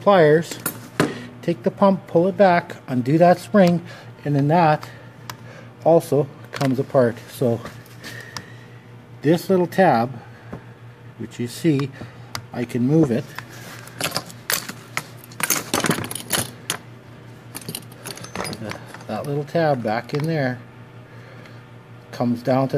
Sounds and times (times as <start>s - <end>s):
Speech: 0.0s - 0.6s, 1.4s - 5.0s, 5.8s - 7.7s, 9.2s - 10.2s, 11.2s - 13.3s, 18.5s - 20.6s, 22.1s - 22.7s.